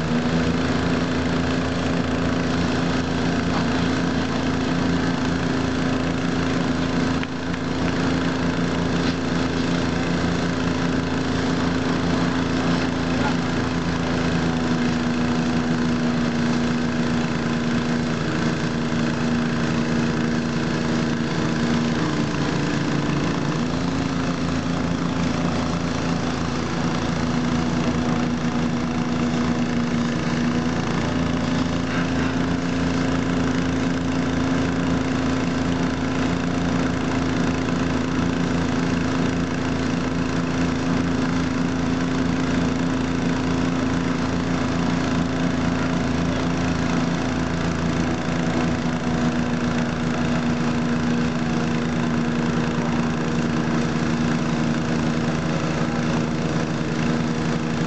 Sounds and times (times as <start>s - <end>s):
Vehicle: 0.0s - 57.8s.